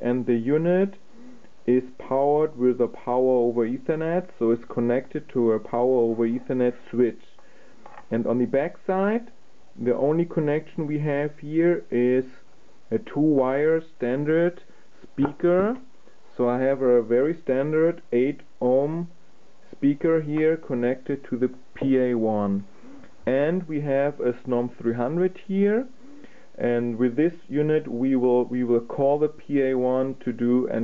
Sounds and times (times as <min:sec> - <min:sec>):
Speech: 0:00.0 - 0:01.0, 0:01.6 - 0:07.4, 0:08.0 - 0:26.0, 0:26.6 - 0:30.8.